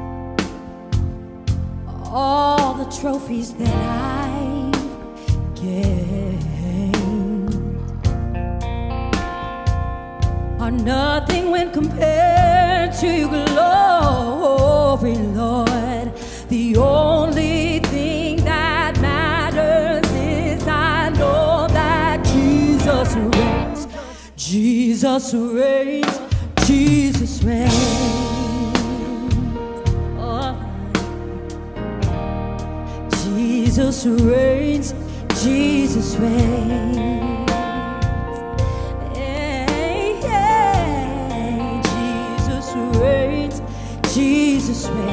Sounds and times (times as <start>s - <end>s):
Music: 0.0s - 45.1s.